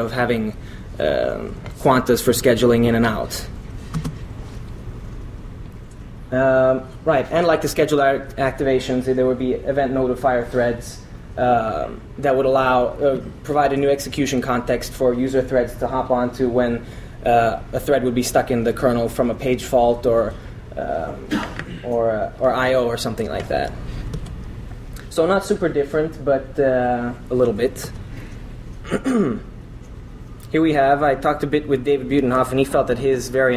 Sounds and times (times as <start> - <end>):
Speech: 0.0 - 3.6, 6.3 - 23.8, 25.1 - 28.0, 30.4 - 33.5.